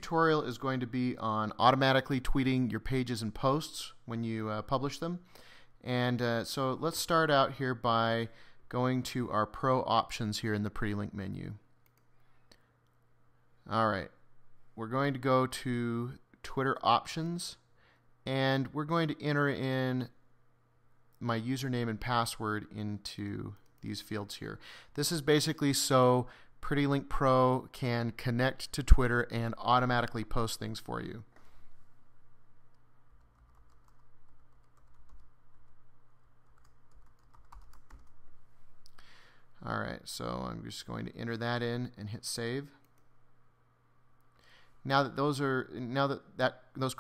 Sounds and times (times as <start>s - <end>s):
Speech: 0.0s - 11.7s, 13.6s - 14.2s, 14.8s - 20.2s, 21.2s - 31.3s, 39.6s - 42.8s, 44.8s - 47.0s.